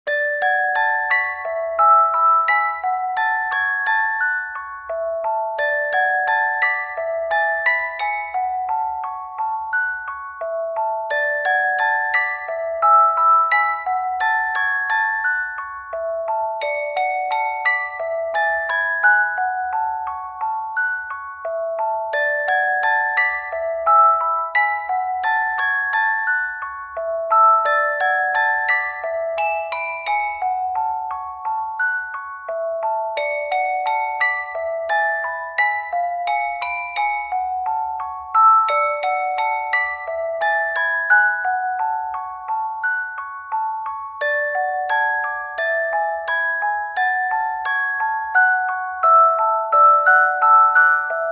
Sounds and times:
Music: 0.0s - 51.3s.

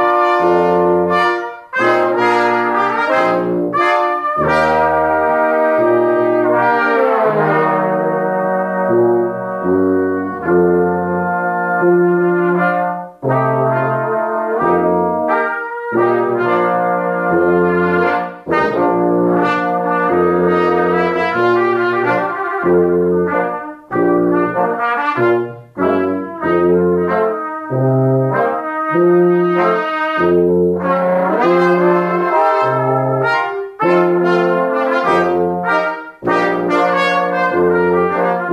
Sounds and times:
Music: 0.0s - 38.5s.

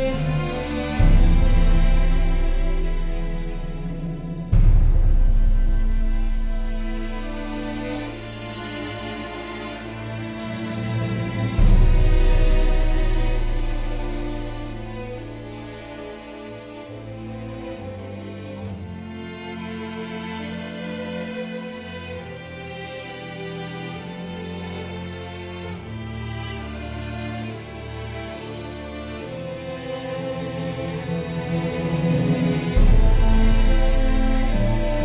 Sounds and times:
Background music: 0.0s - 35.0s.

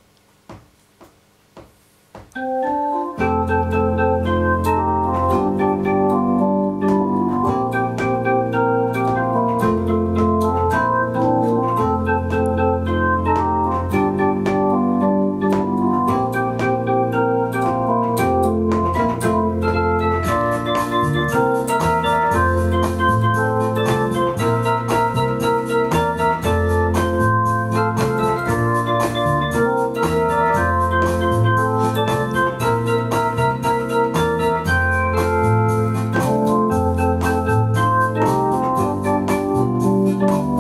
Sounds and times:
Piano: 2.3s - 40.6s.

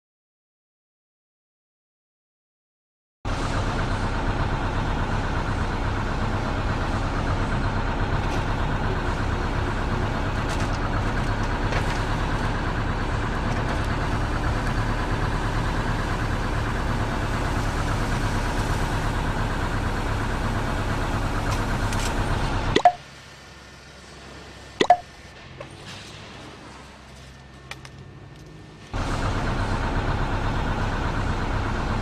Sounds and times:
Vehicle: 3.3s - 32.0s.

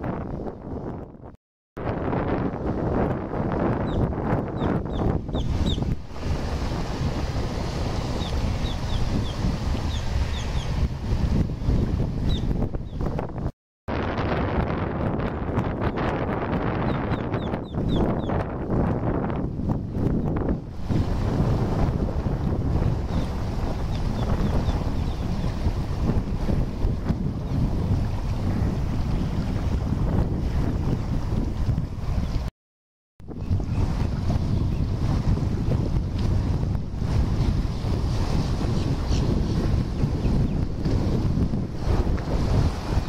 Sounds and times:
Motorboat, speedboat: 0.0s - 32.5s, 33.2s - 43.0s
Wind noise (microphone): 0.0s - 32.5s, 33.2s - 43.0s.

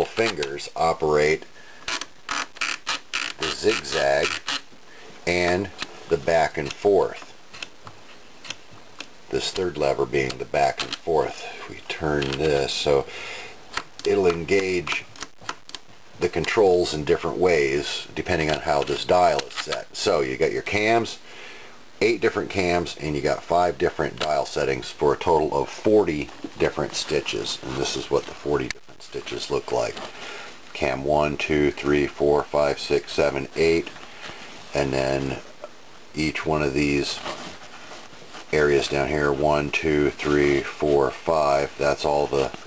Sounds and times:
Speech: 0.0s - 1.5s, 3.4s - 4.4s, 5.3s - 7.3s, 9.3s - 13.1s, 14.0s - 15.1s, 16.2s - 21.2s, 22.0s - 30.1s, 30.7s - 34.0s, 34.7s - 35.5s, 36.1s - 37.4s, 38.5s - 42.6s.

